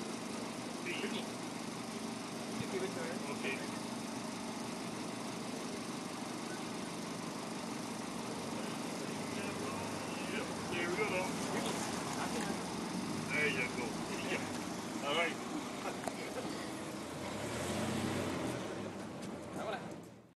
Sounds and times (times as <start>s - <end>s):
Speech: 2.6s - 3.8s, 19.6s - 19.9s.